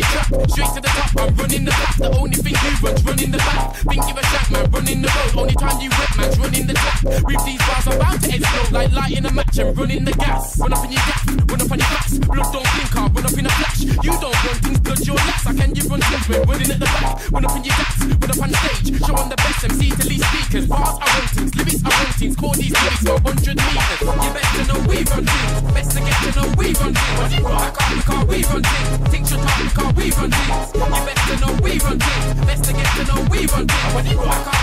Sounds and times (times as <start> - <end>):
Hip hop music: 0.0 - 34.6.